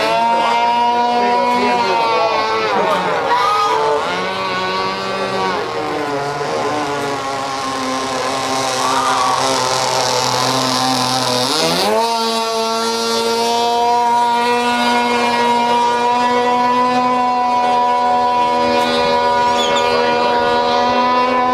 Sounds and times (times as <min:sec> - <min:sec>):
Motorboat, speedboat: 0:00.0 - 0:21.5.